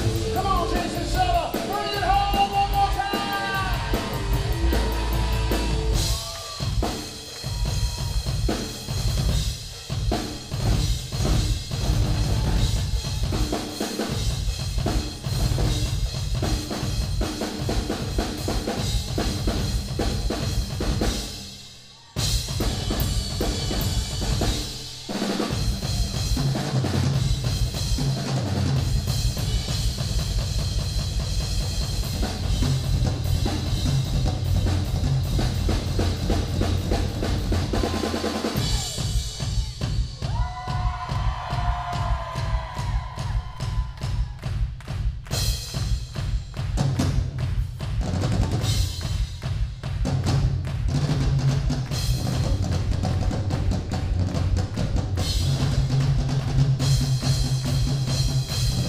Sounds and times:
Bass drum: 0.0 - 21.5, 22.3 - 24.8, 25.5 - 58.8
Drum kit: 0.0 - 58.8
Drum roll: 0.0 - 58.8.

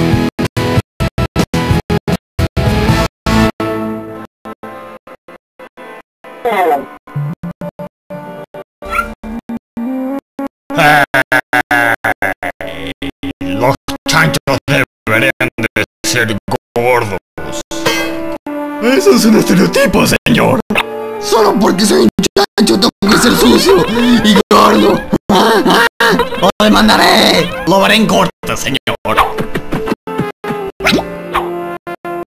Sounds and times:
Music: 0.0 - 10.2, 16.1 - 25.2, 27.0 - 32.3
Speech: 6.5 - 6.9, 13.5 - 17.7, 18.8 - 20.6, 21.2 - 25.0, 26.6 - 29.2.

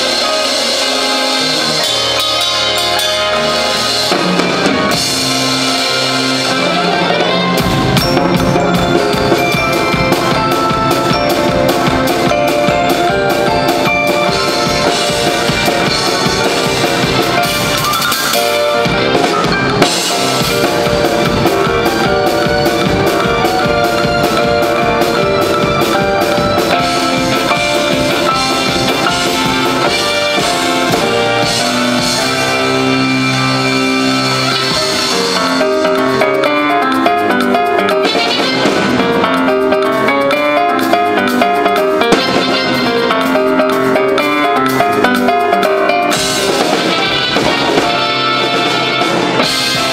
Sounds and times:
Drum kit: 0.0 - 49.9.

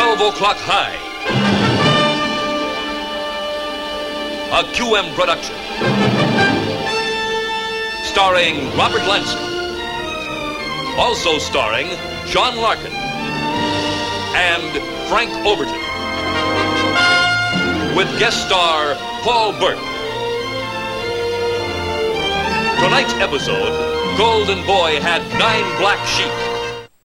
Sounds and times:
Speech: 0.0 - 1.0, 4.5 - 5.6, 8.0 - 9.4, 11.0 - 12.9, 14.3 - 15.7, 18.0 - 19.8, 22.8 - 26.5
Music: 0.0 - 27.0.

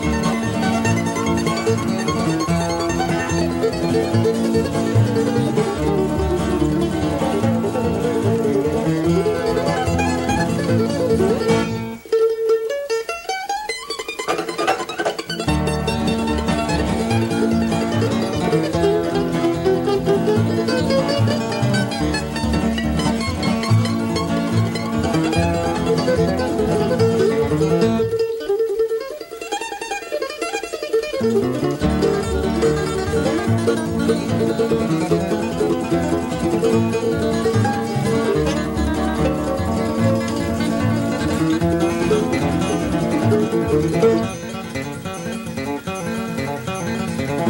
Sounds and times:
Guitar: 0.0 - 47.4
Mandolin: 0.0 - 47.4
Ukulele: 0.0 - 47.4.

